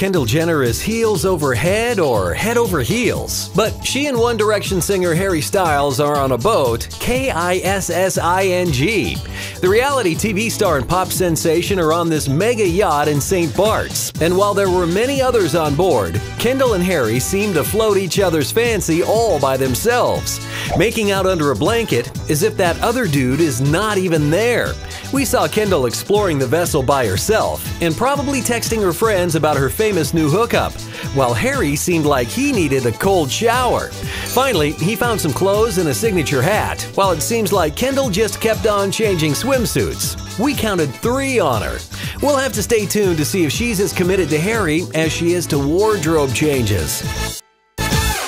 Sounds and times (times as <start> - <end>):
Speech: 0.0 - 47.1
Music: 0.0 - 48.2.